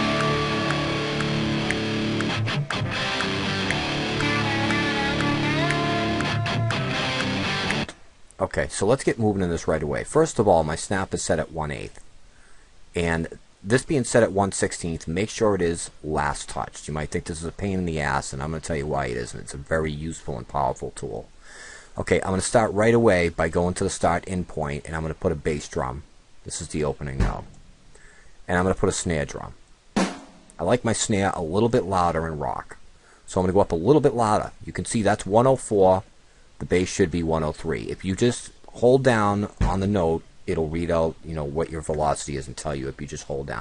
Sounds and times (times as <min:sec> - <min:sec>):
Musical instrument: 0:00.0 - 0:07.9
Speech: 0:08.4 - 0:12.0, 0:13.0 - 0:21.3, 0:22.0 - 0:27.6, 0:28.5 - 0:29.6, 0:30.6 - 0:43.6.